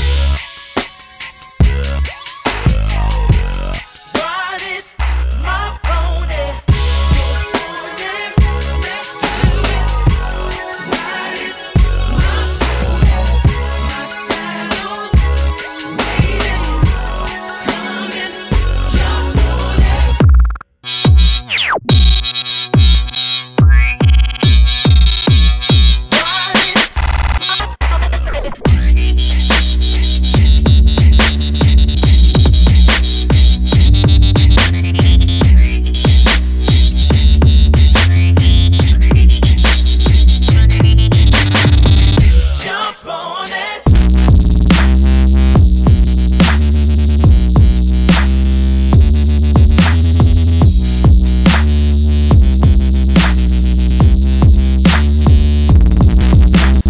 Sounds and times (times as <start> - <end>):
Music: 0.0 - 56.8.